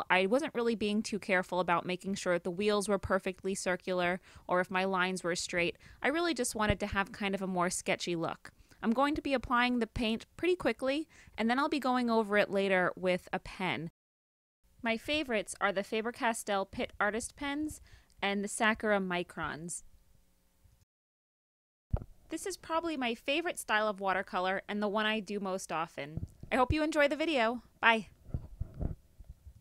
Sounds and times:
Speech: 0.0 - 13.9, 14.8 - 19.8, 22.3 - 28.1.

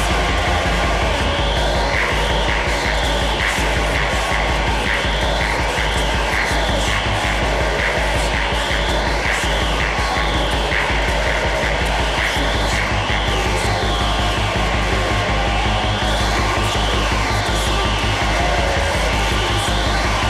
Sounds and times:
Music: 0.0 - 20.3.

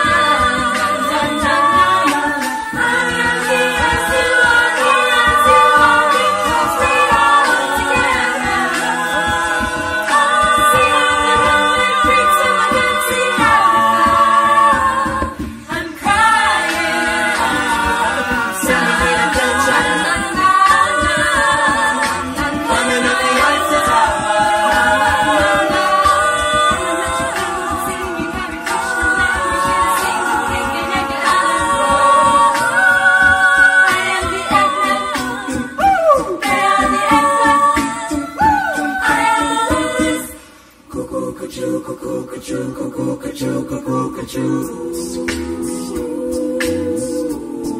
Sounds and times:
A capella: 0.0 - 47.7
Choir: 0.0 - 47.7.

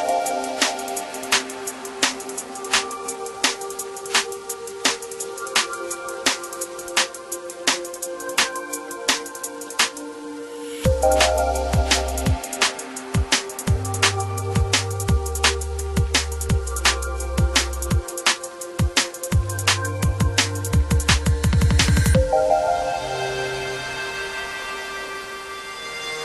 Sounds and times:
Music: 0.0 - 26.2.

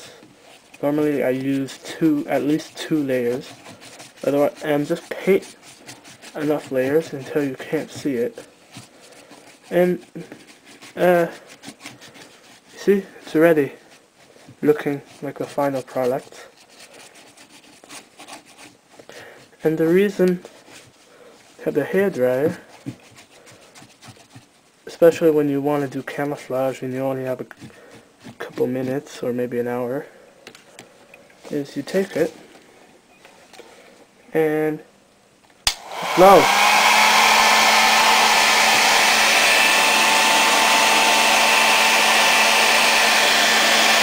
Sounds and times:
Hair dryer: 35.7 - 44.0.

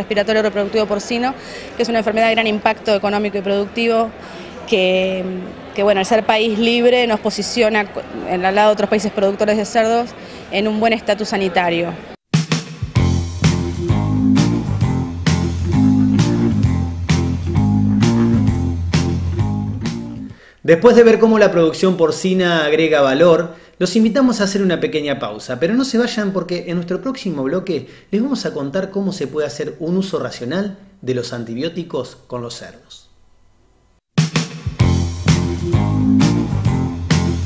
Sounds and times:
Music: 12.3 - 20.4, 34.2 - 37.4
Speech: 20.7 - 33.1.

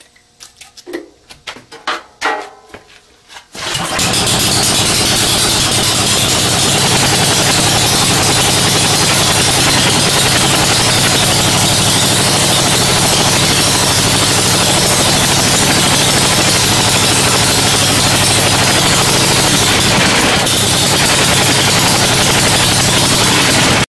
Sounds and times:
Engine: 3.5 - 23.8.

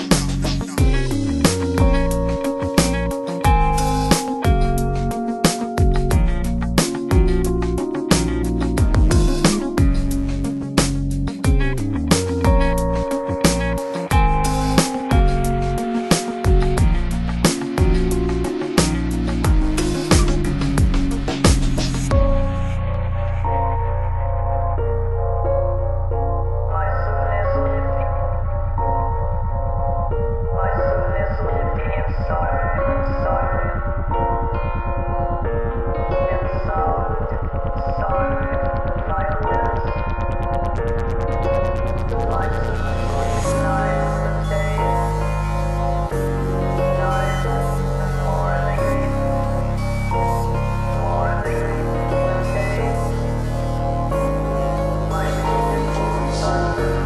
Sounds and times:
Music: 0.0 - 57.0.

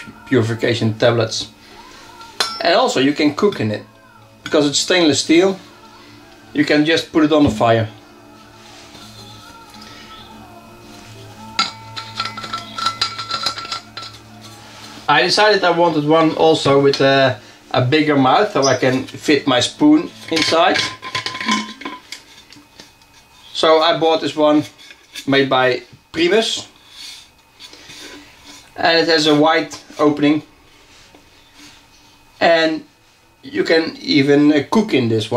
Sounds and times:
Speech: 0.0 - 1.5, 2.1 - 5.6, 6.5 - 8.0, 15.1 - 20.8, 23.6 - 26.7, 28.8 - 30.5, 32.4 - 35.3
Music: 0.0 - 24.0.

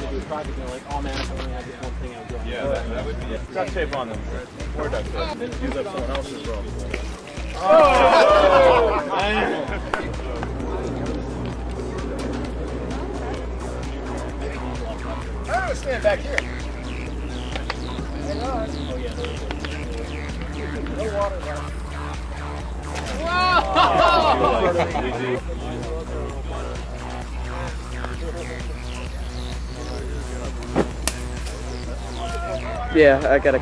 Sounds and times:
Music: 0.0 - 33.6.

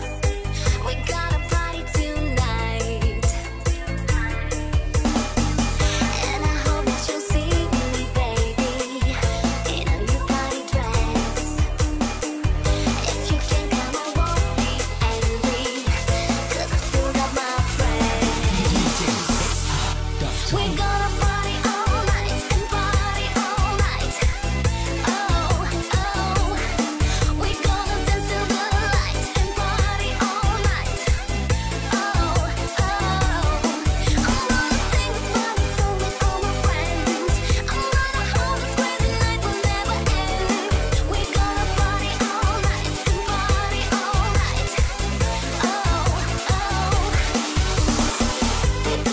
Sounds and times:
Dance music: 0.0 - 49.1.

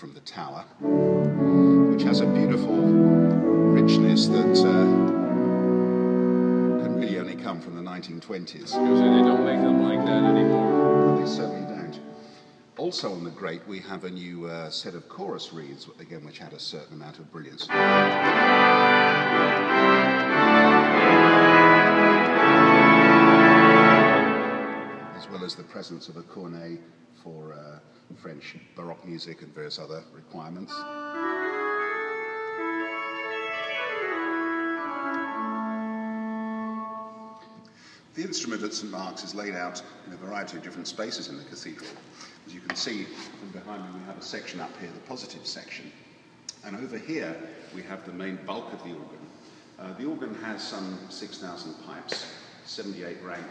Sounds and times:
Speech: 0.0 - 0.8, 1.9 - 2.9, 3.7 - 5.1, 6.8 - 12.1, 12.8 - 17.8, 25.2 - 30.9, 38.2 - 53.5
Organ: 0.8 - 12.6, 17.6 - 26.0, 30.6 - 39.0
Piano: 0.8 - 12.6, 17.7 - 25.7, 30.7 - 37.7.

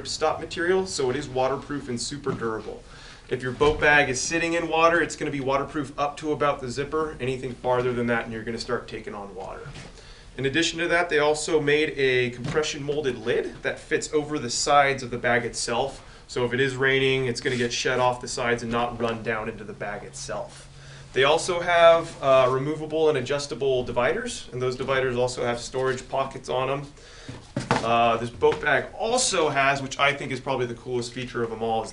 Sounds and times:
Speech: 0.0 - 9.8, 10.4 - 20.6, 21.2 - 27.0, 27.8 - 31.9.

